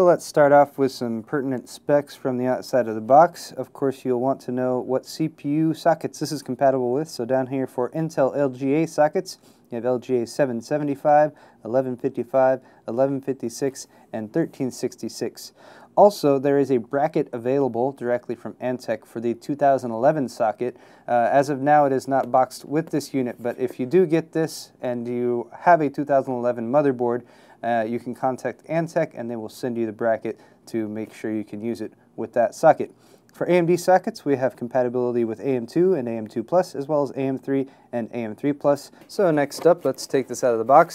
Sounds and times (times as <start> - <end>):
Speech: 0.0 - 40.9.